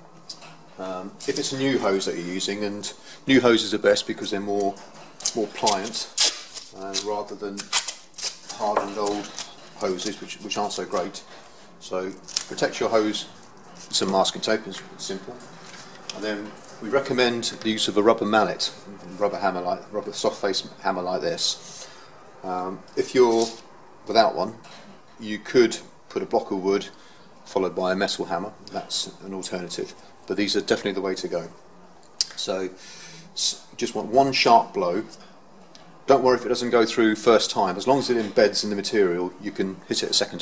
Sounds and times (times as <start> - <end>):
Speech: 0.8 - 7.7, 8.5 - 15.5, 16.1 - 21.6, 22.4 - 24.6, 25.2 - 31.6, 32.2 - 32.8, 33.4 - 35.2, 36.1 - 40.4.